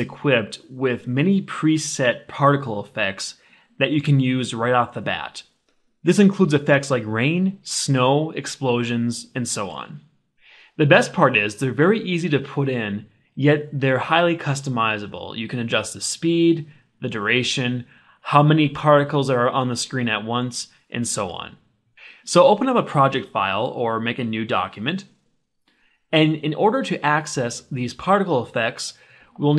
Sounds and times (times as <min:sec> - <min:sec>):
Speech: 0:00.0 - 0:10.1, 0:10.8 - 0:25.2, 0:26.1 - 0:29.5.